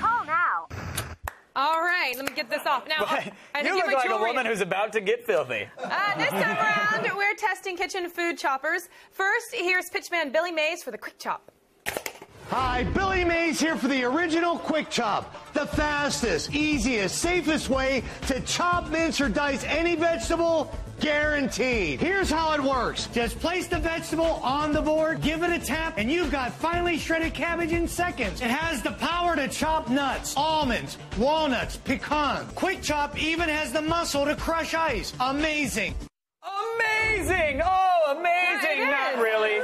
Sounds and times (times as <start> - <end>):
Music: 12.5 - 36.1
Speech: 12.5 - 39.6.